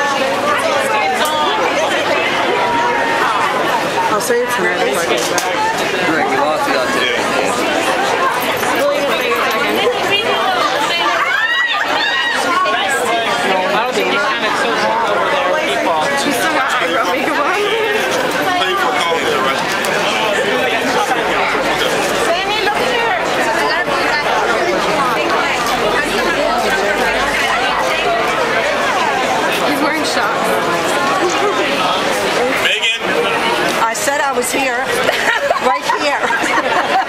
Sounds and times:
Speech: 0:00.0 - 0:37.0.

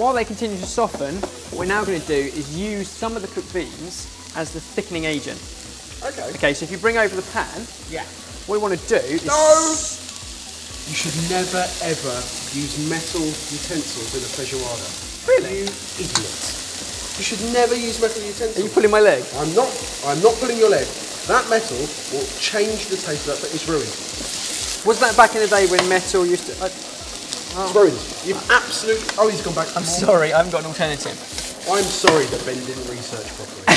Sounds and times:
Speech: 0:17.2 - 0:24.0, 0:24.8 - 0:26.8, 0:27.5 - 0:33.7.

